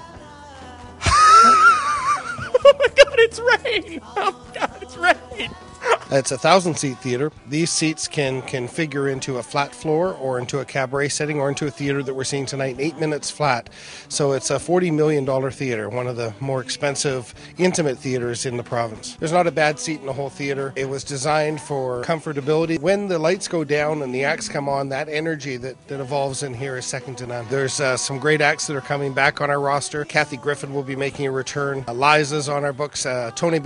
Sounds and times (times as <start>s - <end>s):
Music: 0.0s - 33.6s
Speech: 3.1s - 5.5s, 6.1s - 33.6s.